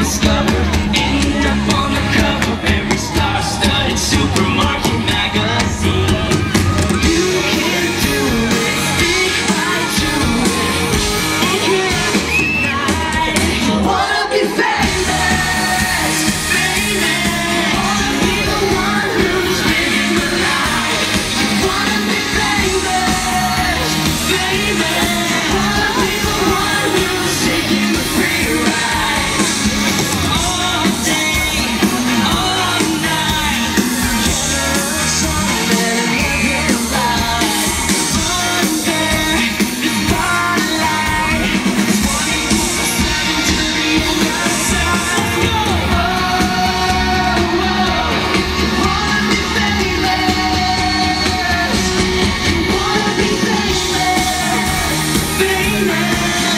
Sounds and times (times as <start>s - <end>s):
Male singing: 0.0s - 56.5s
Music: 0.0s - 56.5s.